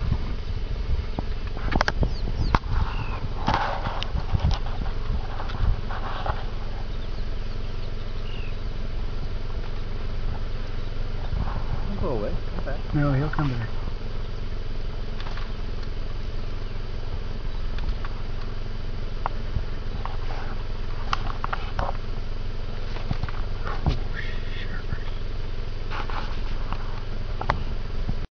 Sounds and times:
Outside, rural or natural: 0.0 - 28.3.

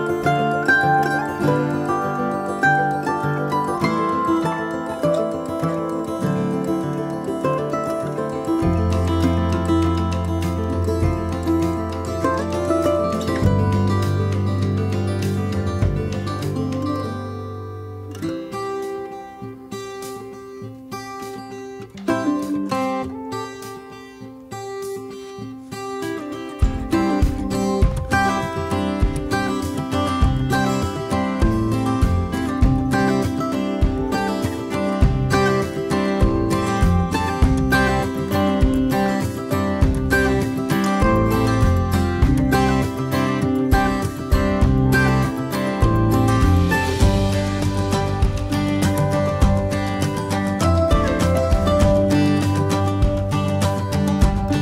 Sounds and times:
Acoustic guitar: 0.0 - 54.6.

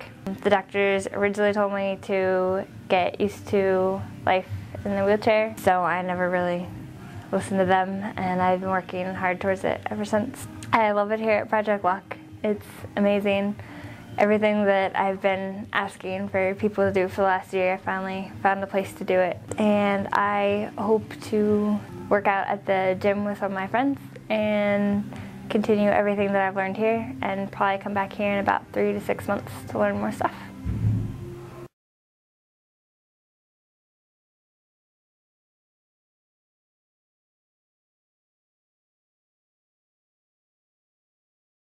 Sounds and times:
Speech: 0.3 - 6.7, 7.4 - 13.6, 14.2 - 30.5.

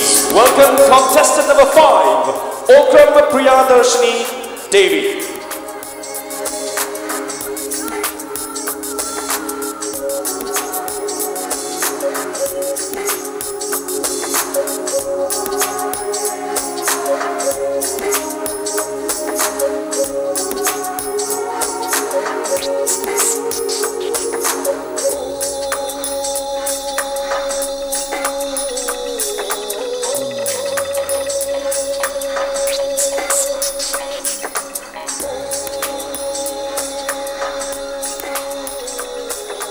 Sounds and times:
Singing: 0.0 - 39.7.

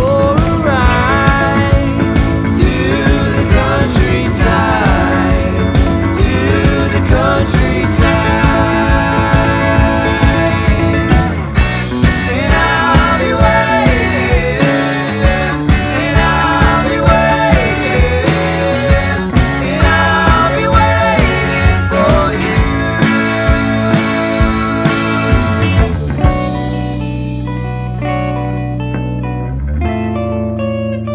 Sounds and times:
Music: 0.0 - 31.1.

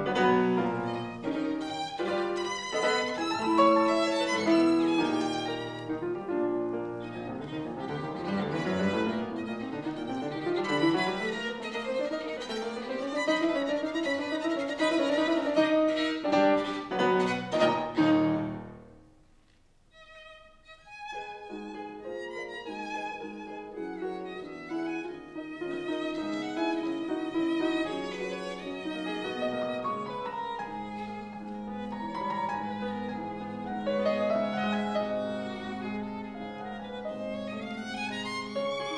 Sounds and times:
Violin, fiddle: 0.0 - 18.6, 19.9 - 38.9.

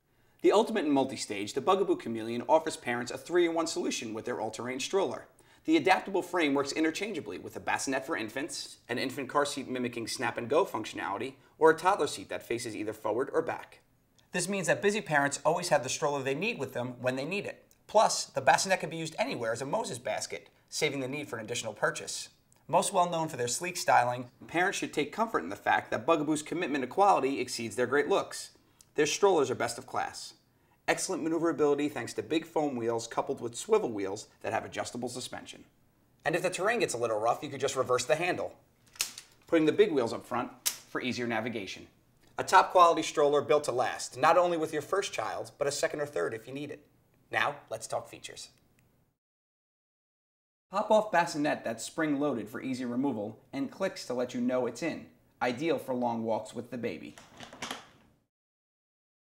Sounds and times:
Speech: 0.4 - 38.6, 39.5 - 48.6, 50.7 - 57.2.

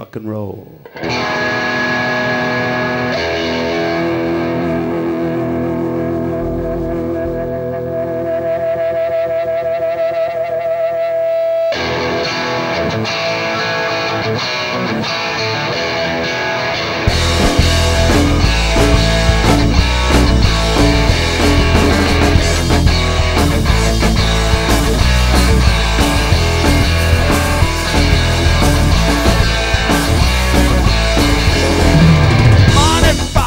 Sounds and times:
Blues: 0.0 - 33.4.

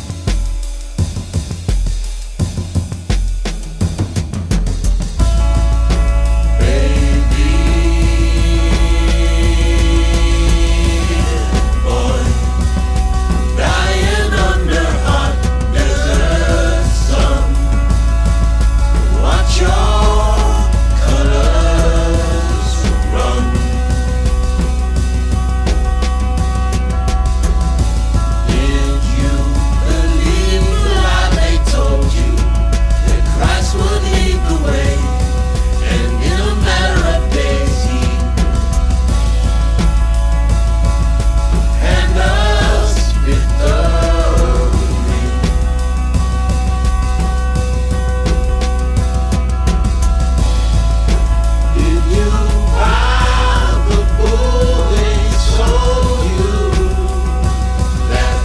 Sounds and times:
Music: 0.0 - 58.4.

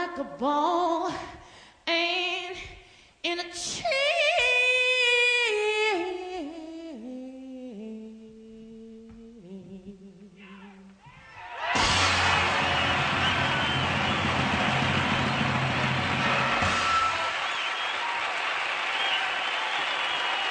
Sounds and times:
Inside, large room or hall: 2.4 - 20.5
Singing: 3.3 - 11.6.

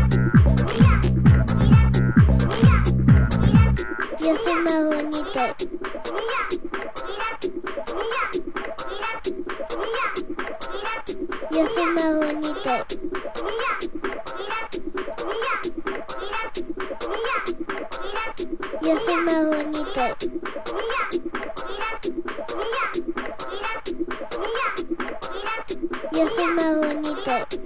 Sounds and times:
Music: 0.0 - 27.6
Speech: 4.1 - 6.5, 9.8 - 13.8, 17.1 - 20.2, 24.4 - 27.6.

